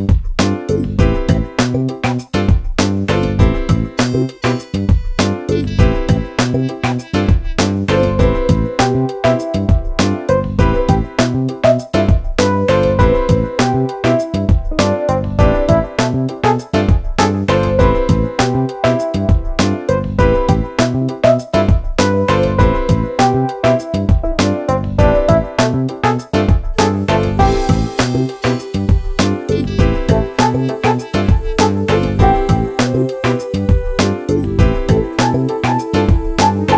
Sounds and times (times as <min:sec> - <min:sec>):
Music: 0:00.0 - 0:36.7.